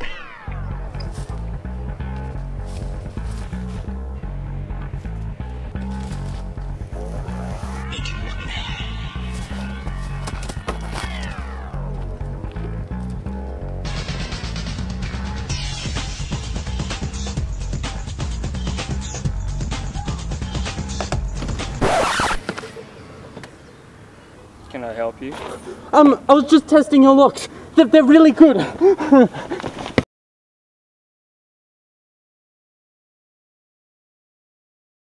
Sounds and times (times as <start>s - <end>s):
Speech: 24.7s - 28.8s.